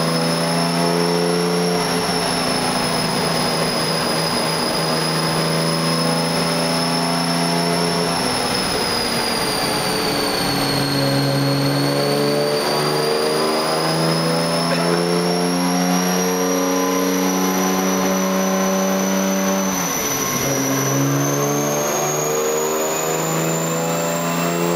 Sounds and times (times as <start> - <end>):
Car: 0.0 - 24.7.